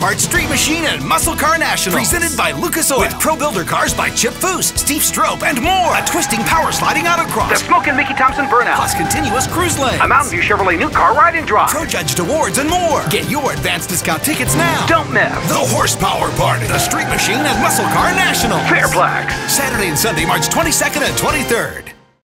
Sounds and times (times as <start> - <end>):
Speech: 0.0 - 22.0
Music: 0.0 - 22.2.